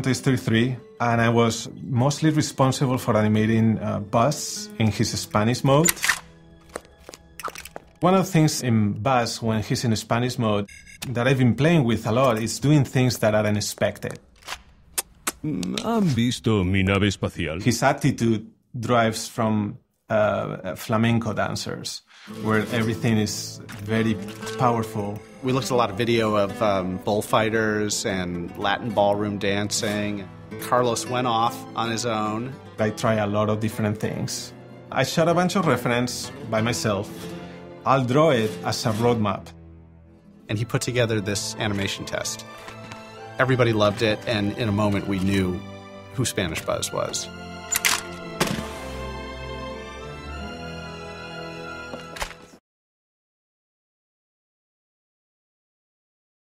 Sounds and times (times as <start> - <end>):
Speech: 0.0 - 6.0, 8.0 - 14.2, 15.4 - 37.1, 37.9 - 39.6, 40.5 - 42.5, 43.4 - 45.6, 46.2 - 47.3
Music: 0.0 - 14.2, 19.0 - 52.6.